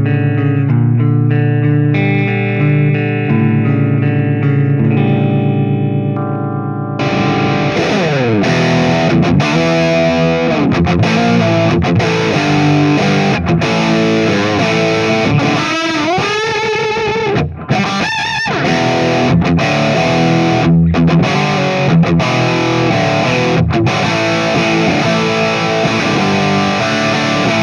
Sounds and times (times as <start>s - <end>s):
Music: 0.0s - 27.6s.